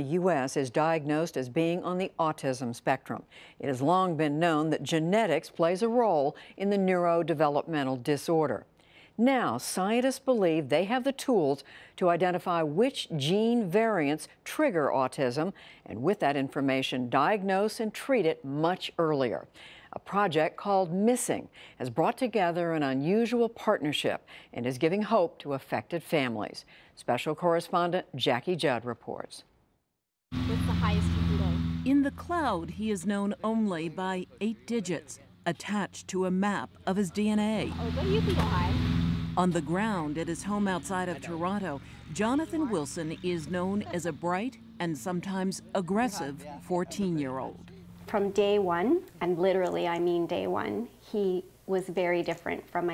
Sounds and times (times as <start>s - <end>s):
Speech: 30.5s - 38.7s, 39.4s - 52.9s.